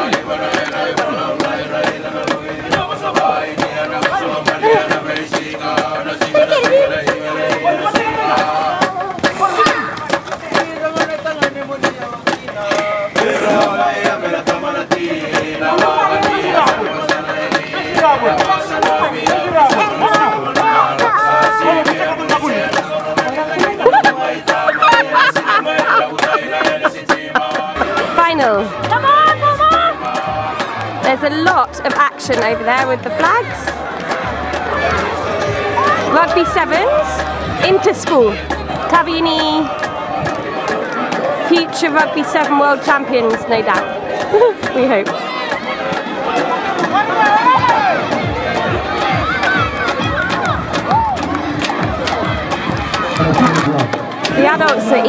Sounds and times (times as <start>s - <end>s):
Music: 0.0s - 55.0s.